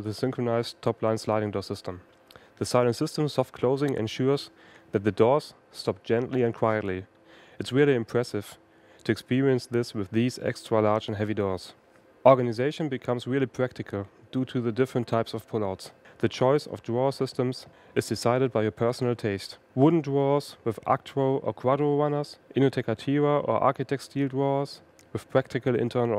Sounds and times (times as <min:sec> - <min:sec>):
Speech: 0:00.0 - 0:26.1.